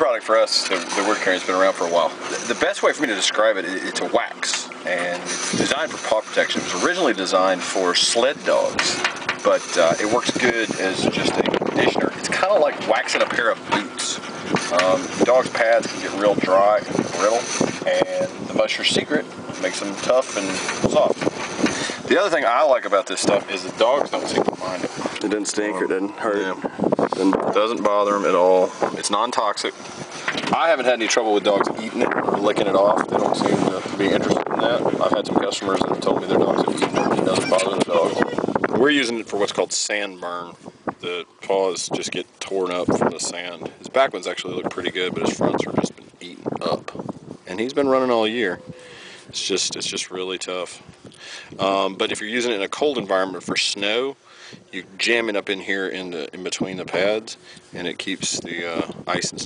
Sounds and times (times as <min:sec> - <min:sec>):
Speech: 0:00.0 - 0:21.2, 0:22.0 - 0:29.8, 0:30.5 - 0:48.7, 0:49.3 - 0:50.8, 0:51.6 - 0:59.4.